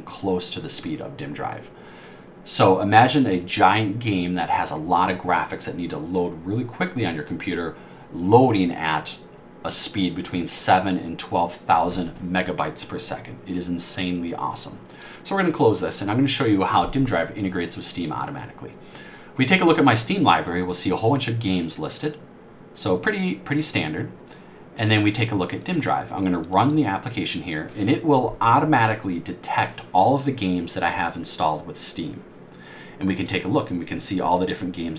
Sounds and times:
Speech: 0:00.0 - 0:01.8, 0:02.5 - 0:18.8, 0:19.4 - 0:22.2, 0:22.8 - 0:24.2, 0:24.8 - 0:32.3, 0:33.0 - 0:34.9.

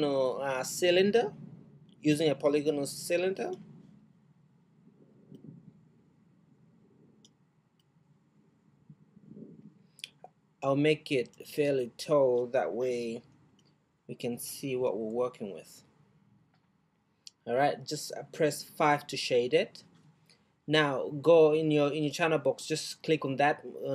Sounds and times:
Speech: 0:00.0 - 0:01.4, 0:02.0 - 0:03.6, 0:10.1 - 0:13.2, 0:14.1 - 0:15.8, 0:17.3 - 0:19.8, 0:20.7 - 0:23.9.

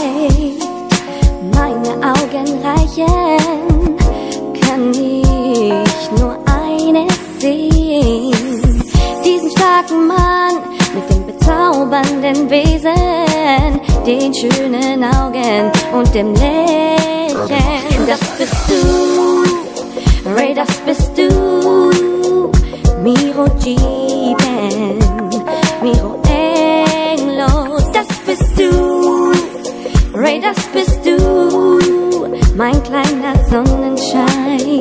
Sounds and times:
Hip hop music: 0:00.0 - 0:02.7, 0:07.8 - 0:11.2, 0:16.3 - 0:22.3, 0:26.2 - 0:32.2
Rhythm and blues: 0:00.0 - 0:34.8.

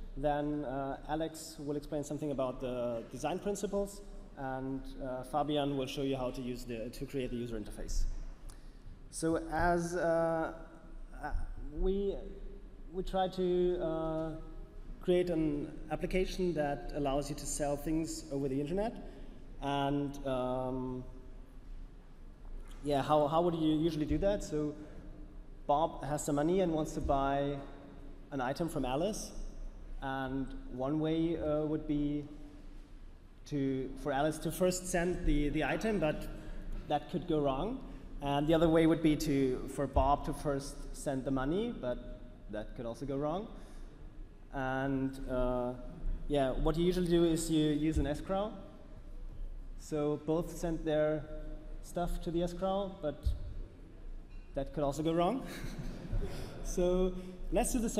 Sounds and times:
Speech: 0:00.0 - 0:08.2, 0:09.1 - 0:21.2, 0:22.7 - 0:24.8, 0:25.7 - 0:29.4, 0:30.0 - 0:32.4, 0:33.4 - 0:43.6, 0:44.5 - 0:48.7, 0:49.8 - 0:53.4, 0:54.5 - 0:55.5, 0:56.5 - 0:57.9.

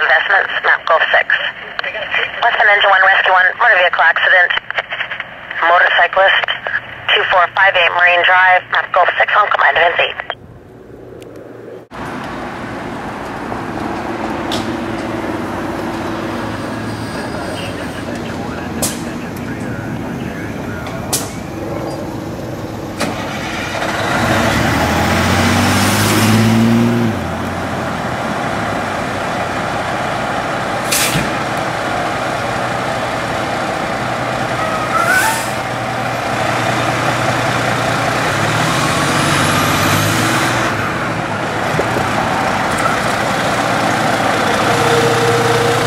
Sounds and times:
Car: 0:09.7 - 0:45.8
Truck: 0:11.9 - 0:45.8
Engine starting: 0:23.0 - 0:24.2
Accelerating, revving, vroom: 0:23.0 - 0:29.8, 0:36.3 - 0:45.8.

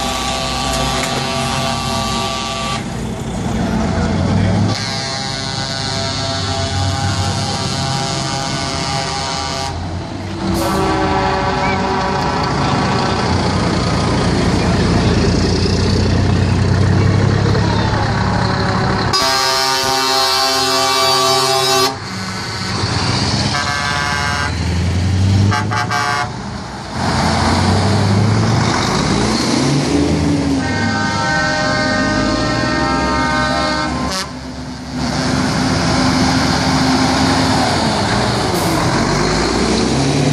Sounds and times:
Truck: 0:00.0 - 0:40.3.

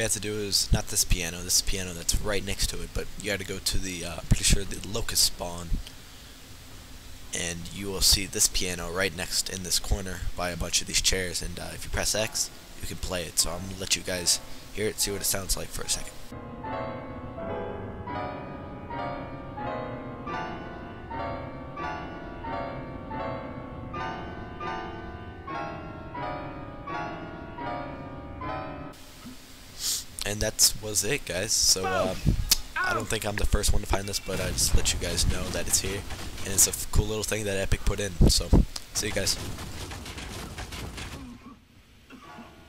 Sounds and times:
Music: 0:16.1 - 0:29.0.

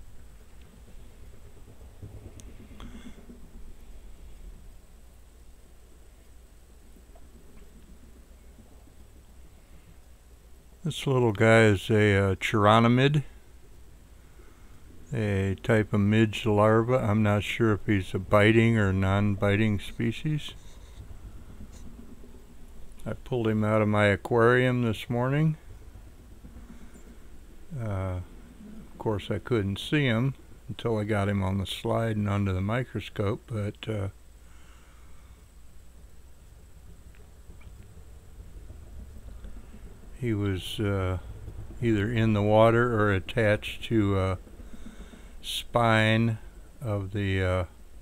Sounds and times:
Speech: 0:10.8 - 0:13.4, 0:15.1 - 0:20.6, 0:23.0 - 0:25.6, 0:27.7 - 0:28.3, 0:29.0 - 0:34.2, 0:40.2 - 0:44.4, 0:45.4 - 0:47.8.

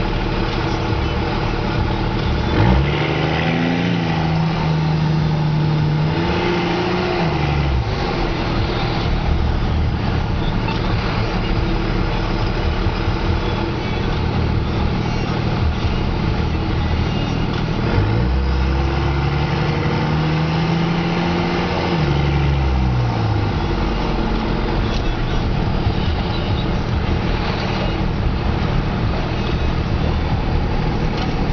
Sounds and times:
Medium engine (mid frequency): 0:00.0 - 0:31.5
Vehicle: 0:00.0 - 0:31.5.

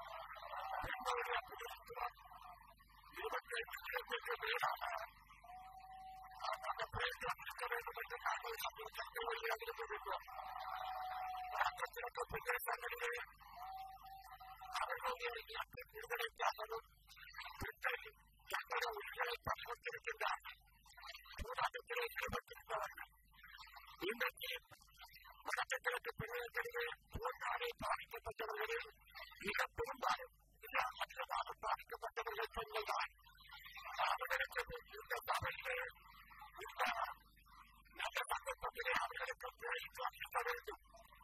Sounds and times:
Male speech, man speaking: 0:00.0 - 0:05.1, 0:06.2 - 0:13.3, 0:14.2 - 0:23.1, 0:24.0 - 0:37.2, 0:38.0 - 0:40.9.

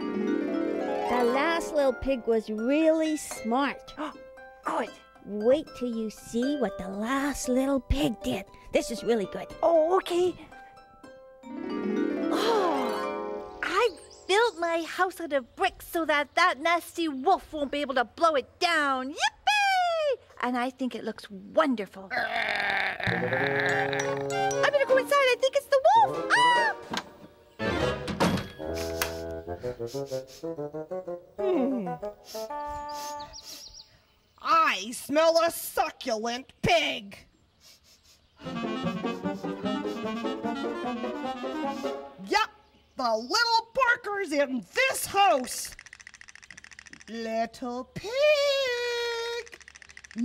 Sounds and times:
Music: 0:00.0 - 0:14.3, 0:23.1 - 0:33.4, 0:38.4 - 0:42.3
Speech: 0:01.1 - 0:10.5, 0:13.6 - 0:22.1, 0:24.6 - 0:26.2, 0:34.4 - 0:37.3, 0:42.2 - 0:45.8, 0:47.1 - 0:49.6.

